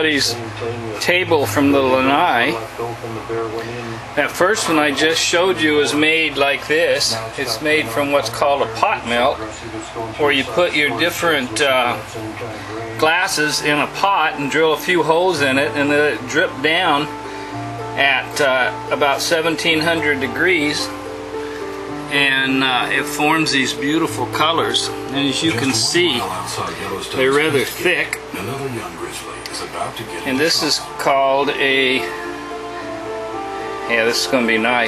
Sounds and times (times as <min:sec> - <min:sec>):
Speech: 0:00.0 - 0:17.1, 0:18.0 - 0:20.9, 0:22.1 - 0:32.2, 0:33.9 - 0:34.8
Music: 0:00.0 - 0:34.8.